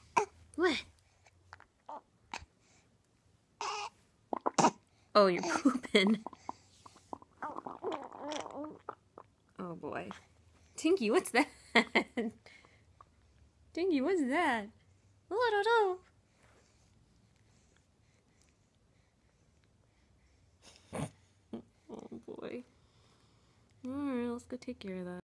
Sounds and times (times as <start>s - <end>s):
Speech: 5.2s - 5.6s, 9.6s - 10.2s, 10.8s - 11.6s, 13.8s - 16.1s, 21.9s - 22.7s, 23.8s - 25.2s.